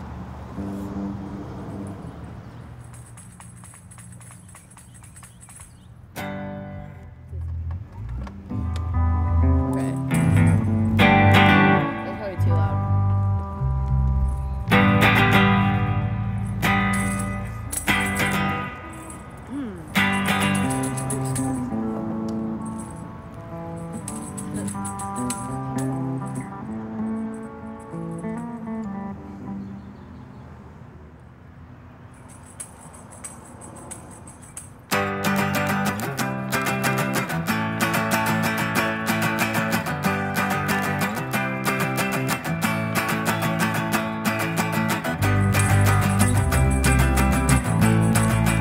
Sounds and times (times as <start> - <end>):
Music: 6.2 - 19.3, 19.9 - 30.2, 34.9 - 48.6.